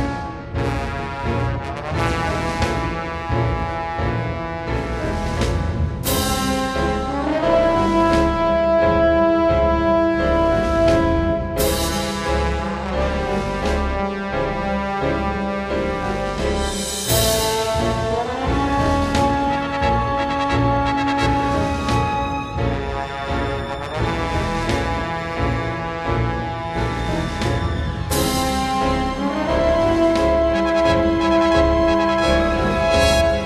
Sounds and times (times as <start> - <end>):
Music: 0.0 - 33.4.